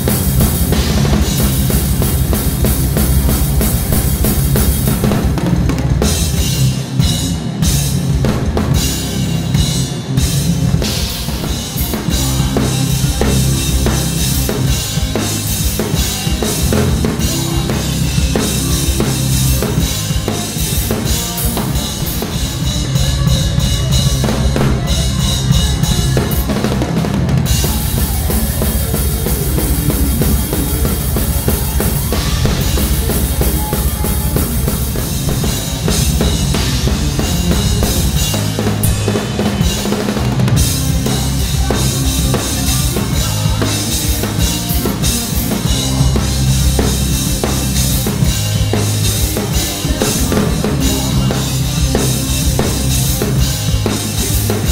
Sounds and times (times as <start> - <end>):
Music: 0.0 - 54.7.